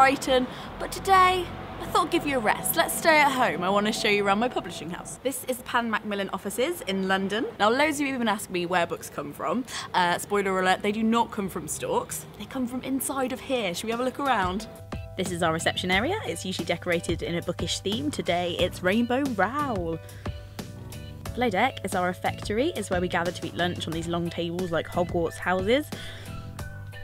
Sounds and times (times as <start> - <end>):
Music: 0.0 - 5.2, 12.7 - 27.0
Speech: 0.0 - 14.6, 15.2 - 20.0, 21.4 - 25.9.